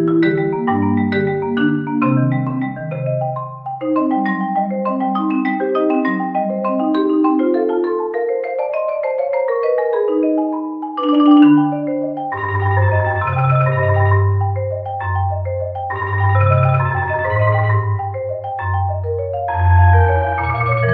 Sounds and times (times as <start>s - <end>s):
Glockenspiel: 0.0s - 20.9s
Marimba, xylophone: 0.0s - 20.9s.